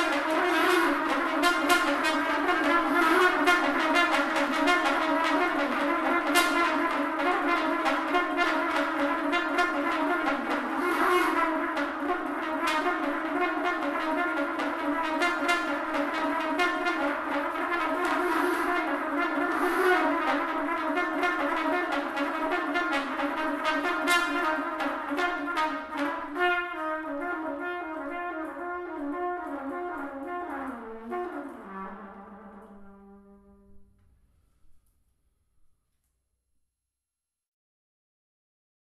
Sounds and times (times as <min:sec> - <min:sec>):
Trumpet: 0:00.0 - 0:34.0.